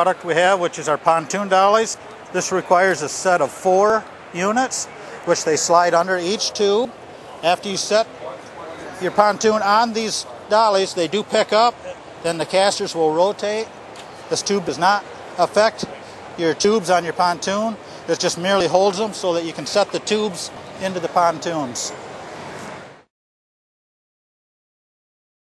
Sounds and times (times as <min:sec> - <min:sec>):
Speech: 0:00.0 - 0:13.7, 0:14.3 - 0:22.0.